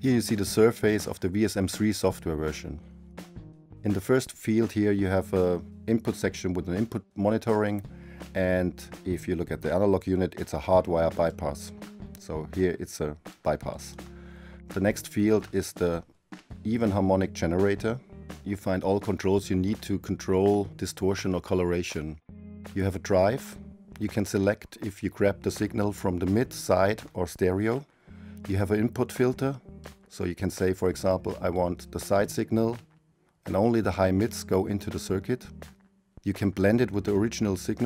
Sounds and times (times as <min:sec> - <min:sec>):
Speech: 0:00.0 - 0:02.8, 0:03.8 - 0:14.0, 0:14.7 - 0:16.0, 0:16.6 - 0:27.8, 0:28.4 - 0:32.8, 0:33.5 - 0:35.5, 0:36.2 - 0:37.8
Music: 0:00.0 - 0:37.8.